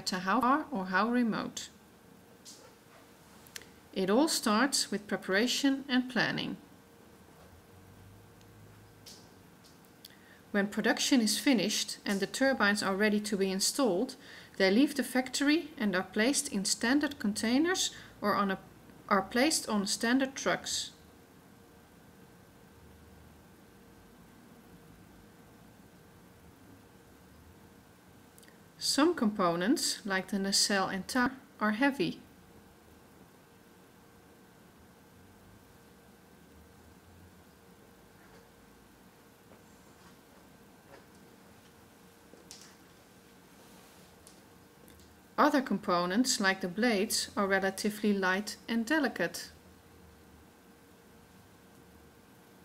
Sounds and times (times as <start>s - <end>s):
Speech: 0.0s - 1.8s, 4.0s - 6.6s, 10.5s - 21.0s, 28.8s - 32.3s, 45.4s - 49.6s.